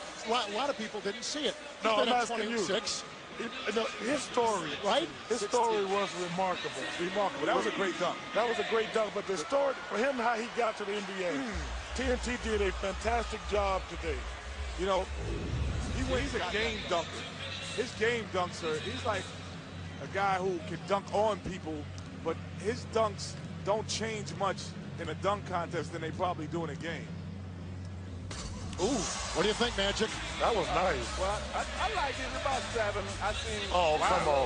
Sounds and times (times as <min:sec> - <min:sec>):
Speech: 0:00.2 - 0:14.2, 0:29.4 - 0:34.4.